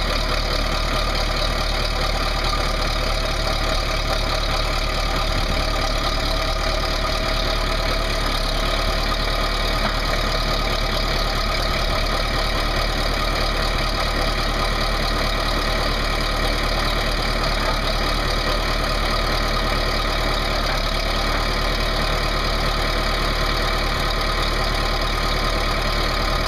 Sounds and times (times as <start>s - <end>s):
Heavy engine (low frequency): 0.0s - 26.4s
Idling: 0.0s - 26.4s
Vehicle: 0.0s - 26.4s.